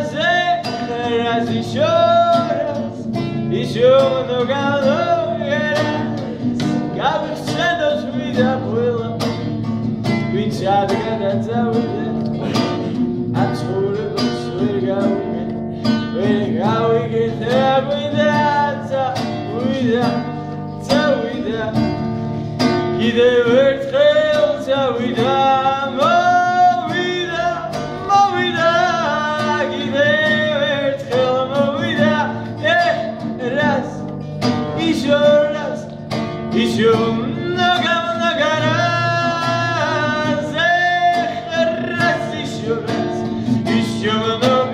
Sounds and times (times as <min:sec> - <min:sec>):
Singing: 0:00.0 - 0:09.5, 0:16.2 - 0:21.8, 0:23.0 - 0:34.0, 0:36.6 - 0:44.7
Guitar: 0:00.0 - 0:44.7
Inside, small room: 0:00.0 - 0:44.7.